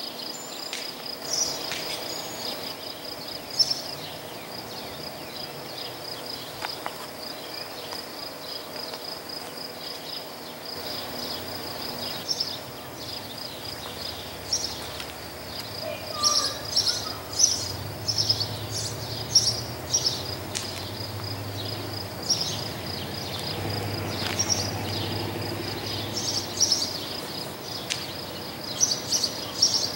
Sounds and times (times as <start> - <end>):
Cricket: 0.0 - 29.9.